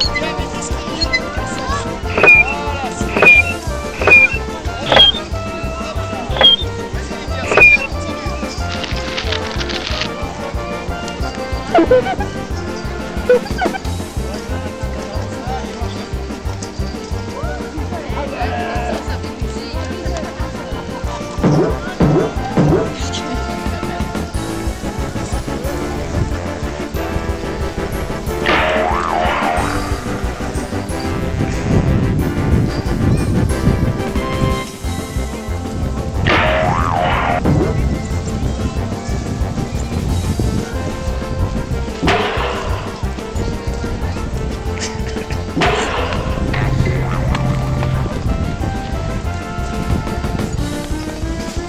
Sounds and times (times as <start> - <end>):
Music: 0.0 - 51.6.